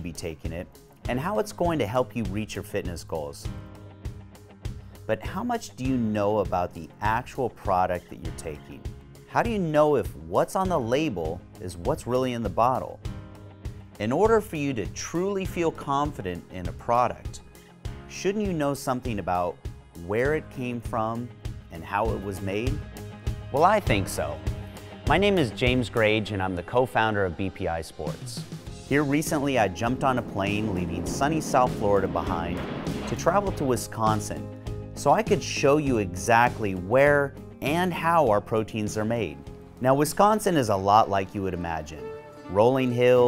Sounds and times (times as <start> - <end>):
Speech: 0.0 - 3.6, 5.1 - 13.0, 14.0 - 17.4, 18.1 - 22.8, 23.6 - 24.4, 25.1 - 43.2
Music: 0.0 - 43.2.